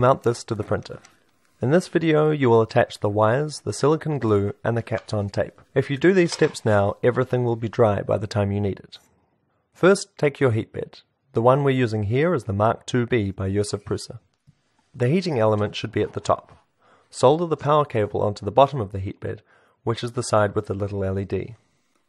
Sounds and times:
Speech: 0.0 - 9.1, 9.8 - 14.3, 15.0 - 21.6.

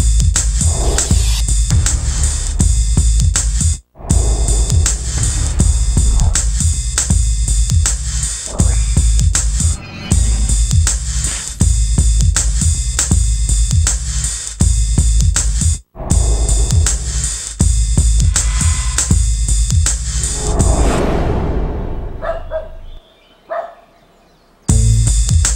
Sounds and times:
Drum machine: 0.0 - 9.7, 10.5 - 20.8, 24.7 - 25.5.

